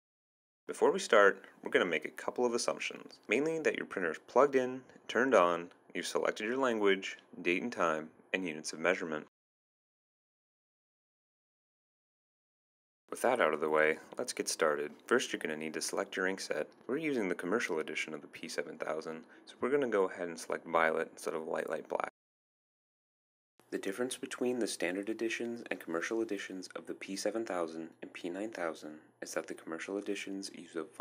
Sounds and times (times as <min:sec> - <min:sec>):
Speech: 0:00.7 - 0:09.3, 0:13.1 - 0:22.2, 0:23.7 - 0:31.0.